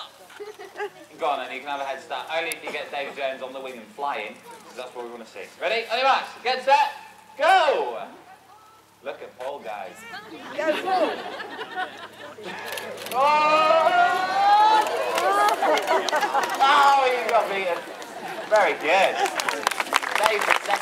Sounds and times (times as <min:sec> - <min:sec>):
Chatter: 0:00.0 - 0:05.3, 0:08.0 - 0:20.8.